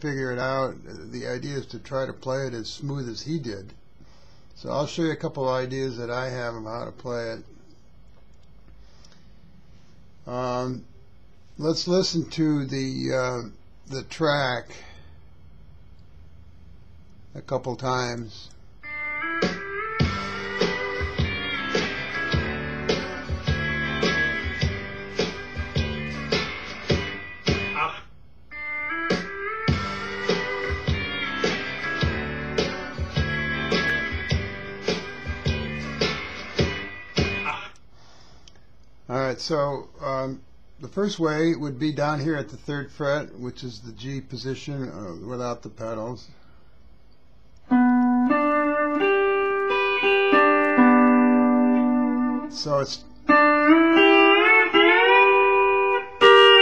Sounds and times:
Steel guitar, slide guitar: 20.2s - 27.1s, 29.9s - 36.4s, 47.7s - 56.6s.

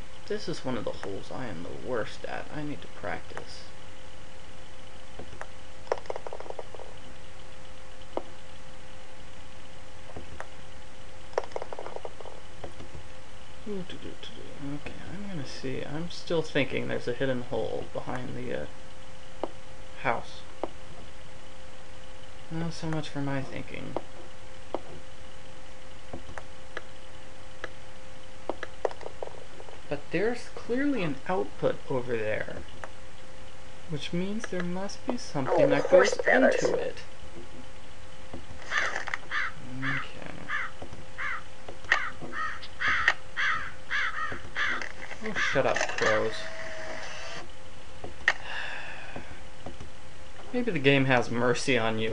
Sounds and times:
Speech: 0.3s - 3.7s, 13.6s - 18.7s, 20.0s - 20.5s, 22.5s - 24.0s, 29.9s - 32.6s, 33.9s - 37.1s, 39.6s - 40.5s, 45.2s - 46.5s, 50.5s - 52.1s.

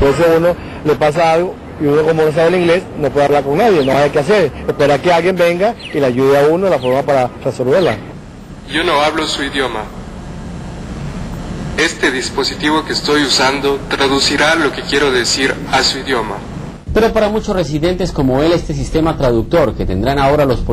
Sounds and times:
Male speech, man speaking: 0.0s - 8.1s, 8.7s - 9.9s, 11.8s - 20.7s.

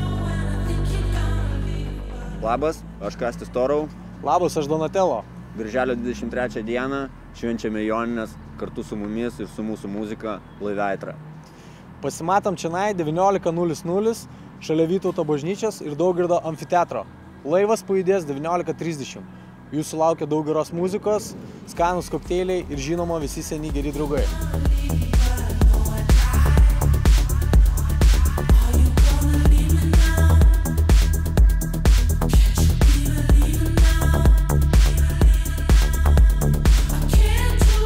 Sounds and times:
Music: 0.0s - 4.6s, 21.8s - 37.8s.

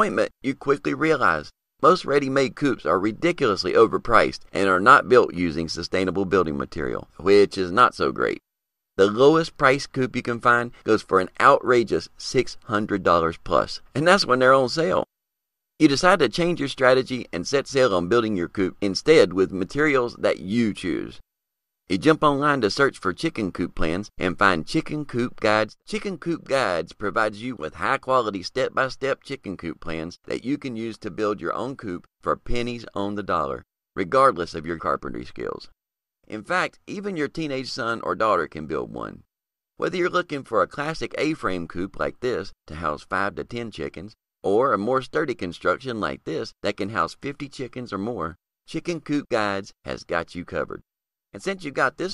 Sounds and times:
Speech: 0.0s - 8.4s, 9.0s - 15.1s, 15.8s - 21.2s, 21.9s - 35.7s, 36.3s - 39.2s, 39.8s - 50.8s, 51.4s - 52.1s.

